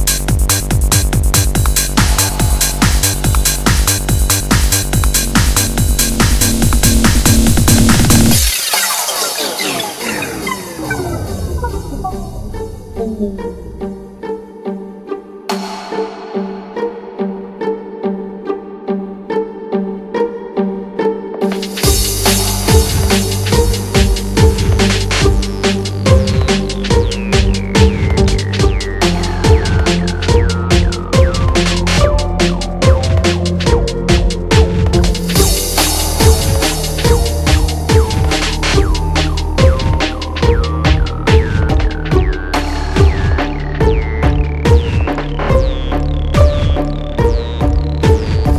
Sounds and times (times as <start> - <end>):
Soundtrack music: 0.0 - 48.5.